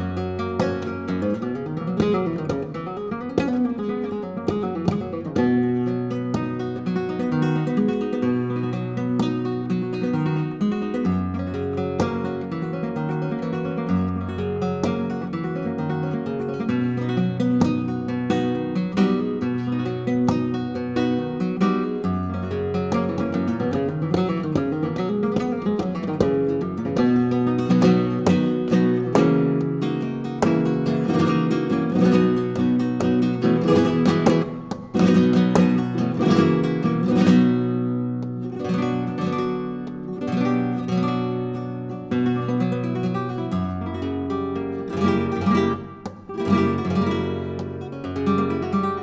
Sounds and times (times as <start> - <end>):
Flamenco: 0.0 - 49.0
Guitar: 0.0 - 49.0.